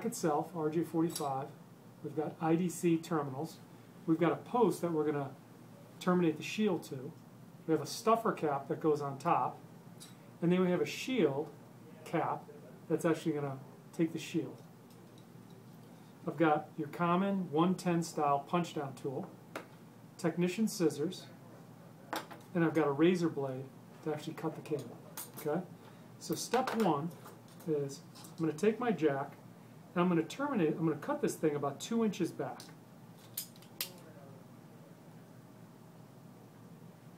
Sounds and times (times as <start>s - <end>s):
Speech: 0.0s - 5.4s, 6.0s - 9.6s, 10.4s - 14.6s, 16.3s - 19.3s, 20.2s - 21.4s, 22.5s - 29.4s, 30.0s - 32.8s.